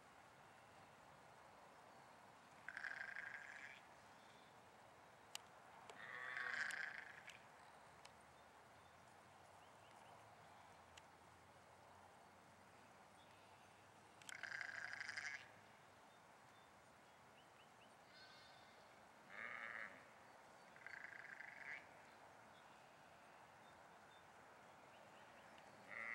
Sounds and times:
Sheep: 2.7s - 3.8s, 6.0s - 7.4s, 14.3s - 15.5s, 18.0s - 20.1s, 25.8s - 26.1s
Domestic animals, pets: 6.0s - 7.4s.

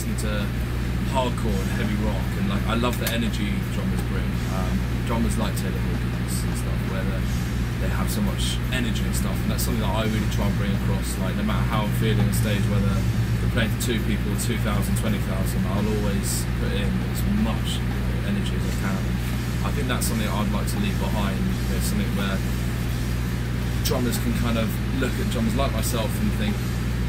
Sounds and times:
Speech: 0.0s - 22.5s, 23.8s - 26.7s.

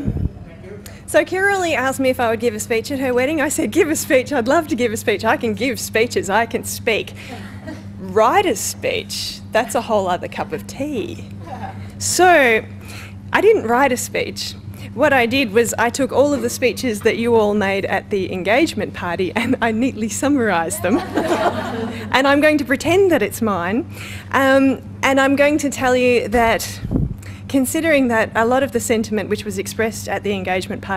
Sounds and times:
Narration, monologue: 0.2s - 30.9s
Female speech, woman speaking: 1.1s - 7.2s, 8.0s - 11.3s, 12.0s - 12.7s, 13.3s - 21.2s, 22.1s - 26.9s, 27.5s - 30.9s.

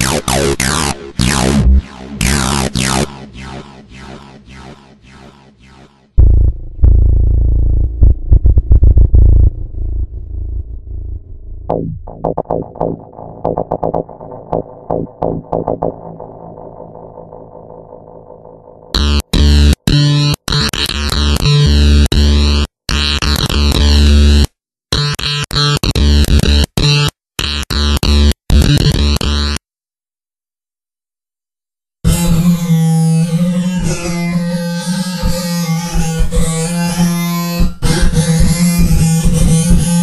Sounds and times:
Didgeridoo: 0.0s - 24.4s, 32.1s - 40.0s.

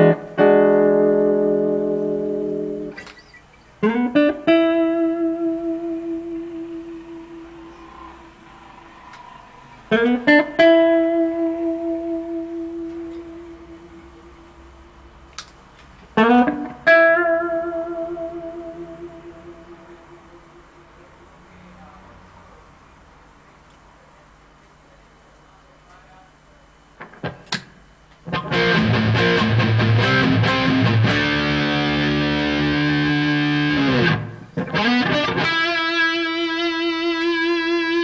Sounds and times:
Electric guitar: 0.0s - 14.8s, 15.4s - 21.4s, 28.2s - 38.0s.

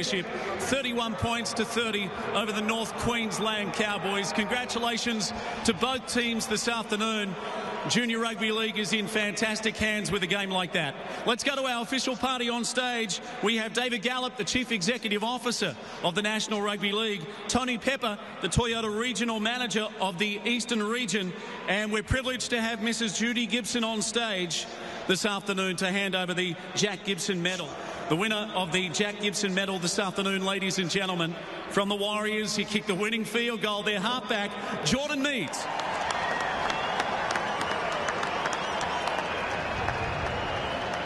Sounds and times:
Male speech, man speaking: 0.0s - 35.7s
Narration, monologue: 0.0s - 35.7s.

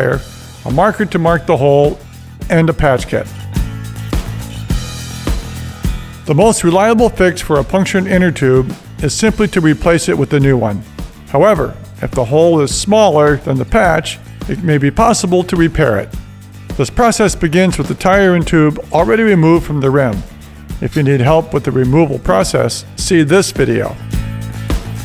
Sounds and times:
Speech: 0.0s - 3.4s, 6.3s - 16.2s, 16.8s - 24.0s
Music: 0.0s - 25.0s.

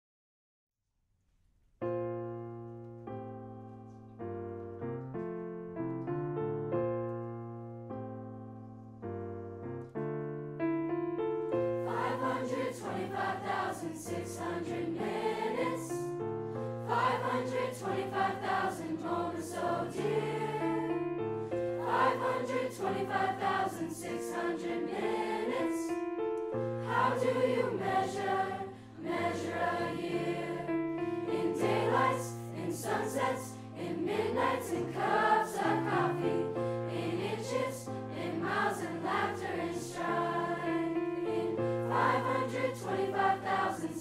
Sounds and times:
Music: 1.2s - 44.0s.

